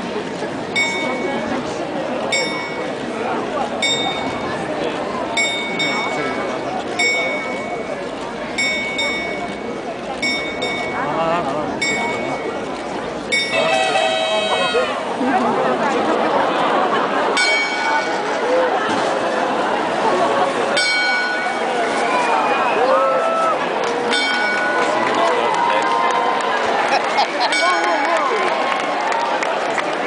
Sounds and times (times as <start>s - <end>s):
Speech: 0.0s - 26.2s.